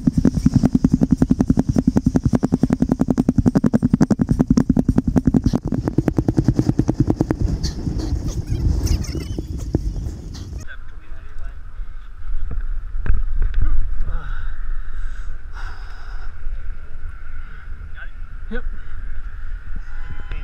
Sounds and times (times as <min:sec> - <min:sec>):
Outside, urban or manmade: 0:00.0 - 0:20.4.